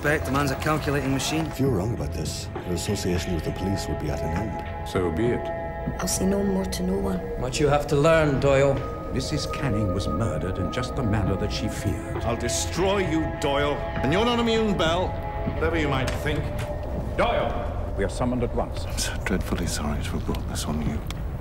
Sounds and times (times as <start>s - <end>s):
Music: 0.0s - 21.4s.